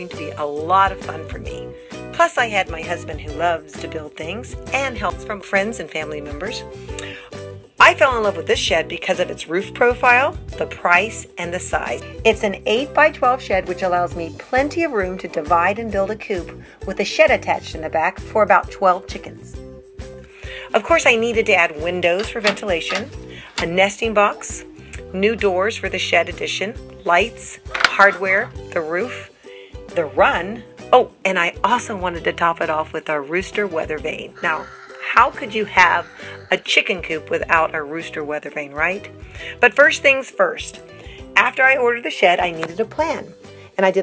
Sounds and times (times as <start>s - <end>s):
Speech: 0.0s - 7.2s, 7.8s - 19.6s, 20.6s - 29.3s, 29.9s - 40.8s, 41.4s - 44.0s
Music: 0.0s - 44.0s.